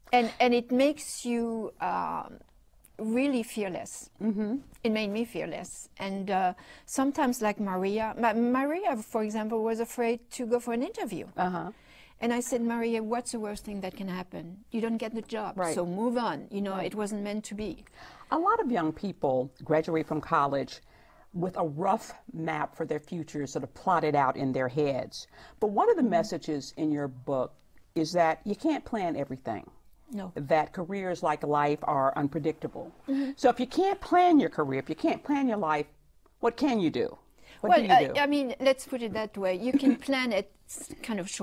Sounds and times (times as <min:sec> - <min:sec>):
Female speech, woman speaking: 0:03.0 - 0:04.1, 0:04.9 - 0:20.8, 0:21.4 - 0:41.4.